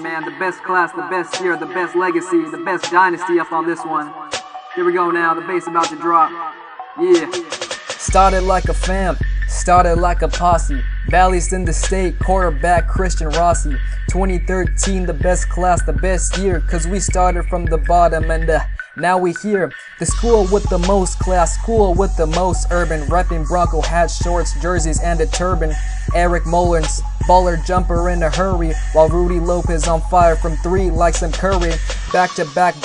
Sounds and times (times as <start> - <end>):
Pop music: 0.0 - 32.8.